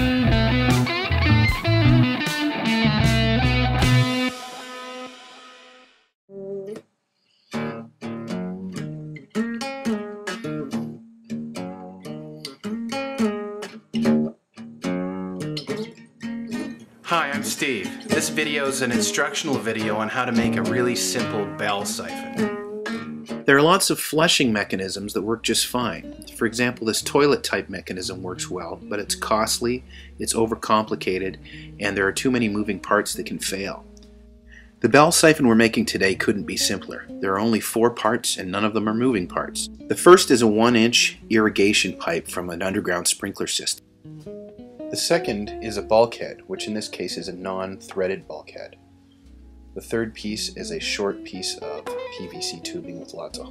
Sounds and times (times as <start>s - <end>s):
Music: 0.0s - 53.5s
Speech: 17.1s - 22.4s, 23.5s - 33.8s, 34.8s - 43.8s, 45.0s - 48.8s, 49.8s - 53.5s.